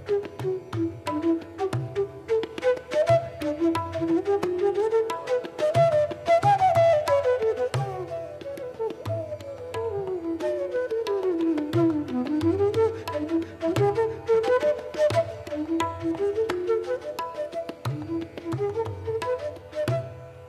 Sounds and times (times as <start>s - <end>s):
Tabla: 0.0s - 20.4s.